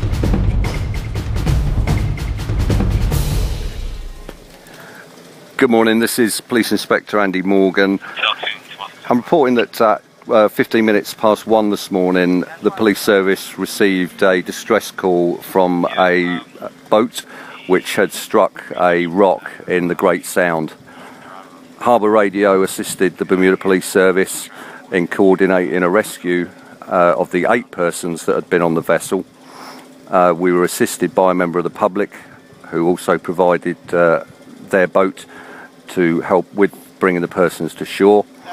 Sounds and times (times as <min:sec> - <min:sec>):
Speech: 0:05.6 - 0:29.3, 0:30.1 - 0:35.3, 0:35.9 - 0:38.5.